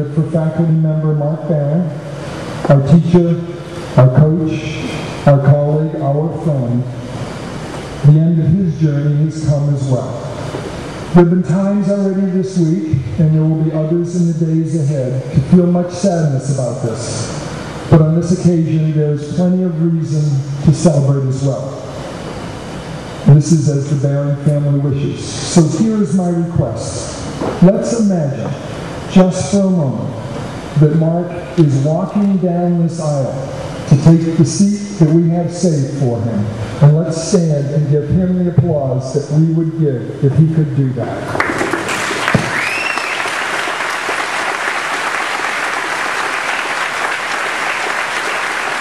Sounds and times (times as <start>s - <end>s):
Male speech, man speaking: 0.0s - 2.0s, 2.7s - 6.9s, 8.0s - 10.3s, 11.2s - 17.3s, 17.9s - 21.8s, 23.3s - 30.2s, 30.8s - 41.3s.